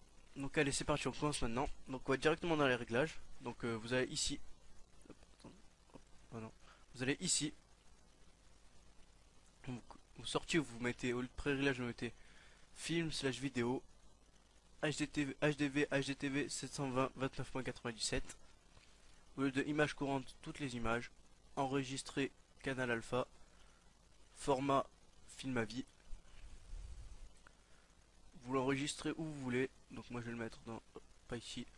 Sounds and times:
Speech: 0.3s - 4.4s, 6.3s - 7.6s, 9.6s - 12.2s, 12.8s - 13.9s, 14.8s - 18.4s, 19.4s - 23.3s, 24.4s - 25.9s, 28.4s - 31.7s.

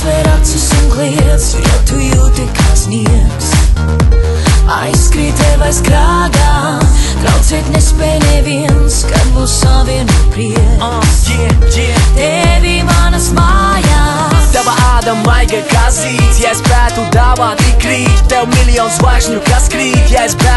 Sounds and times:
Music: 0.0s - 20.5s.

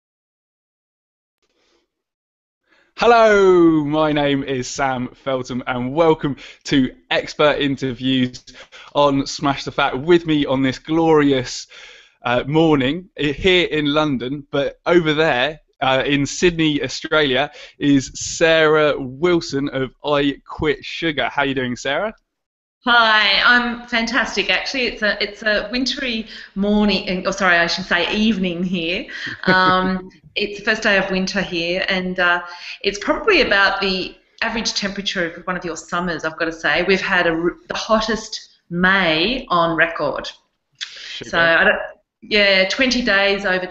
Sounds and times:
Speech: 3.0s - 22.2s, 22.9s - 43.7s.

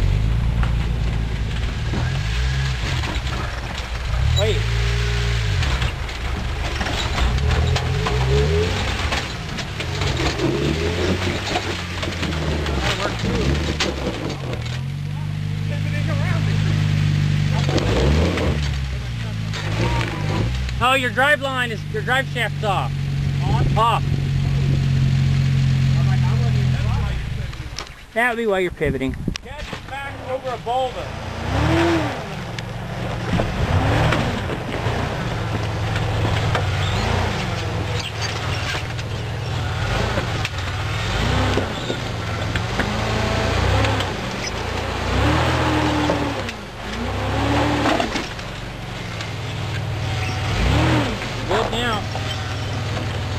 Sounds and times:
Outside, rural or natural: 0.0s - 53.3s
Truck: 0.0s - 53.3s
Speech: 4.4s - 4.7s, 12.7s - 13.6s, 15.1s - 16.8s, 18.9s - 24.1s, 26.0s - 31.1s, 51.5s - 52.2s.

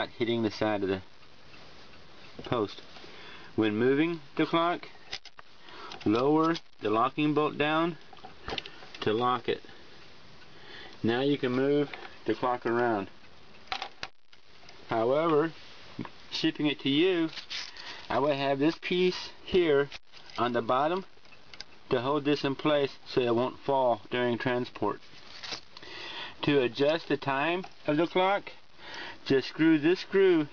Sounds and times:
Speech: 0.0s - 1.1s, 2.4s - 2.8s, 3.6s - 4.9s, 6.0s - 8.0s, 9.0s - 9.7s, 11.0s - 13.1s, 14.9s - 15.6s, 16.3s - 17.4s, 18.1s - 21.1s, 21.9s - 25.0s, 26.4s - 28.6s, 29.2s - 30.5s.

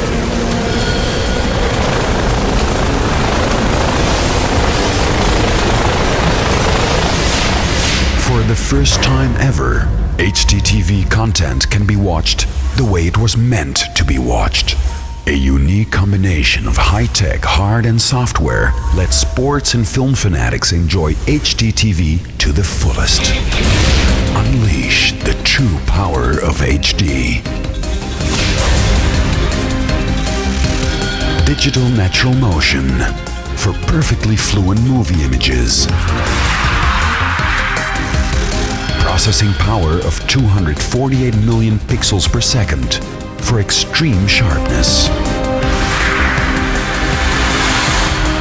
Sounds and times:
Music: 0.0s - 48.4s
Speech: 8.2s - 23.5s, 24.3s - 27.5s, 31.4s - 35.9s, 39.0s - 45.2s.

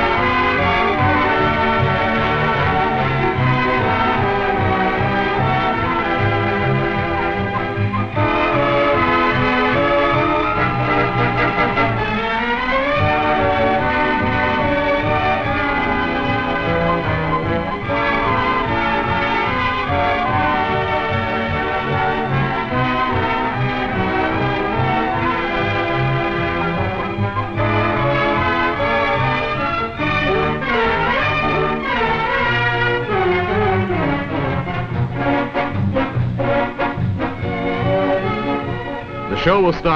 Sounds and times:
Music: 0.0s - 39.9s.

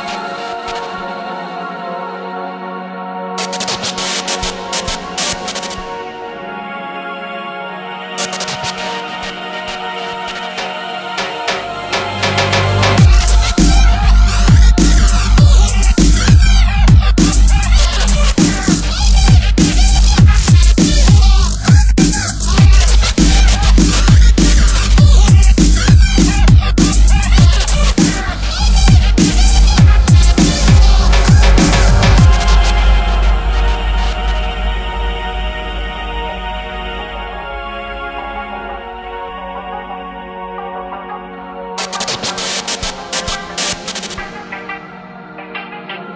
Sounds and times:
Dubstep: 3.4s - 6.0s, 8.2s - 38.0s, 41.8s - 46.1s.

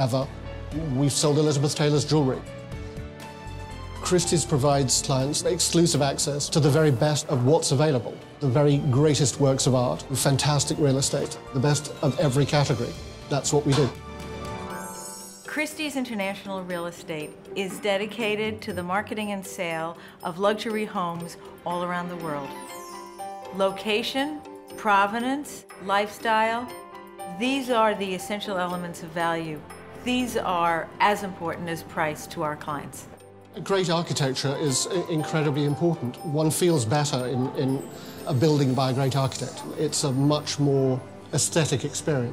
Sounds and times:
Music: 0.0s - 42.3s.

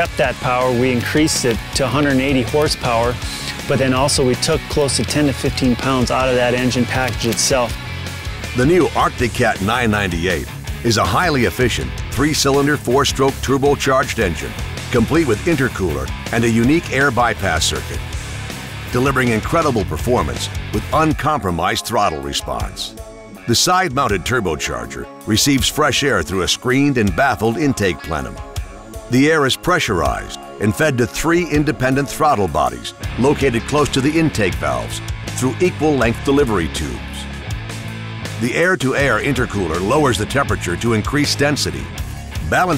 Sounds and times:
Speech: 0.0s - 7.8s, 8.6s - 18.0s, 18.9s - 28.4s, 29.1s - 37.3s, 38.4s - 42.7s
Music: 0.0s - 42.7s.

